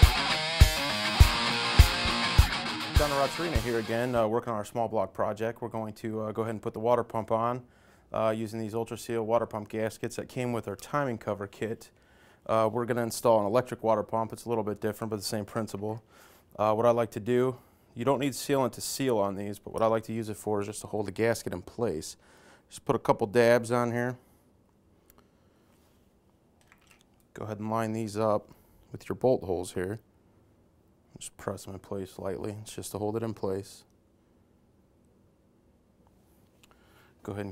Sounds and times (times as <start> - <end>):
Speech: 3.0 - 16.0, 16.6 - 24.2, 27.3 - 30.0, 31.1 - 33.9, 37.2 - 37.5.